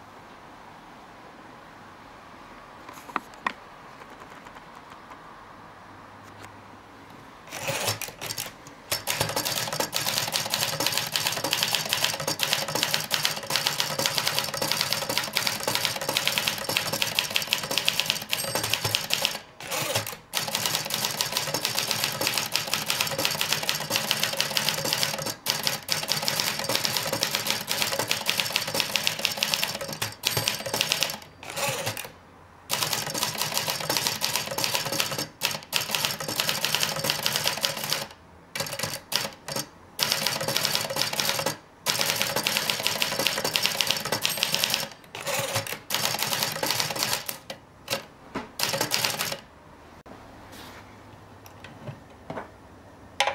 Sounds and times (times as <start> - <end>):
Typewriter: 3.4 - 5.2, 7.5 - 49.5.